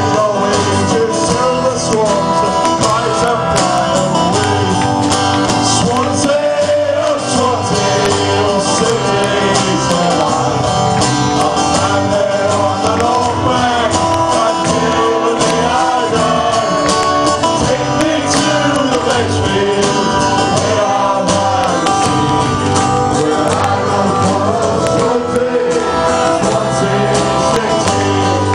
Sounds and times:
Male singing: 0.0 - 4.8, 5.6 - 10.6, 11.4 - 17.0, 17.6 - 28.5
Music: 0.0 - 28.5.

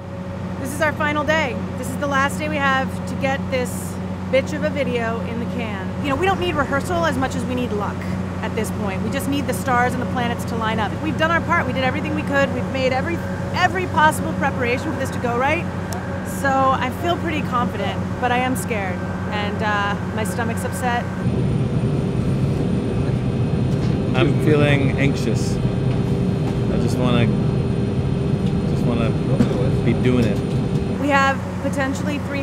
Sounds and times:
Speech: 0.6 - 15.6, 16.3 - 21.0, 24.2 - 25.6, 26.7 - 27.3, 28.7 - 30.4, 31.0 - 32.4.

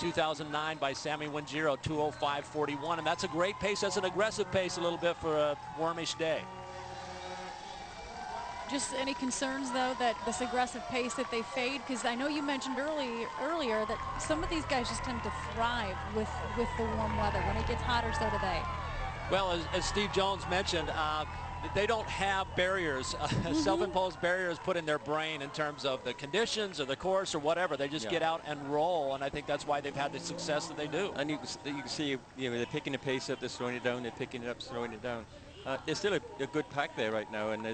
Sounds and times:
Outside, urban or manmade: 0.0 - 37.7.

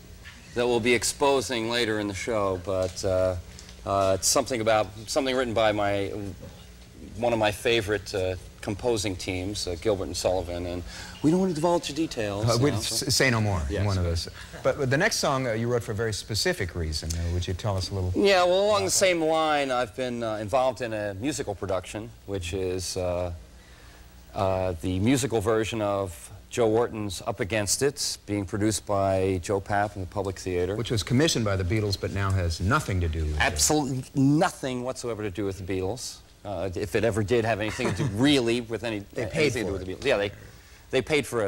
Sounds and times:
Speech: 24.4 - 41.4.

